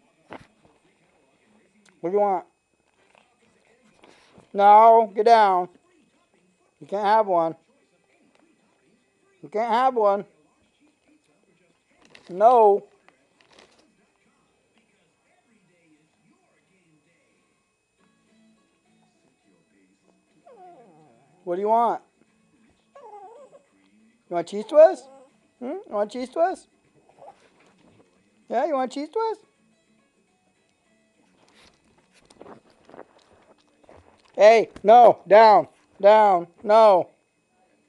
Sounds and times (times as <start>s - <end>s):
Speech: 0.0s - 17.5s, 18.9s - 29.4s, 34.4s - 37.8s.